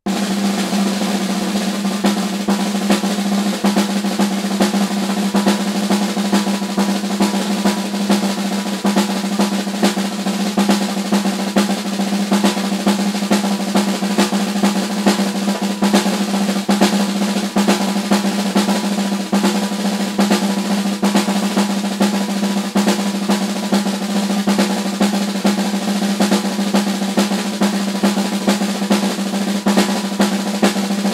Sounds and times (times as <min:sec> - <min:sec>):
Drum roll: 0:00.0 - 0:31.1.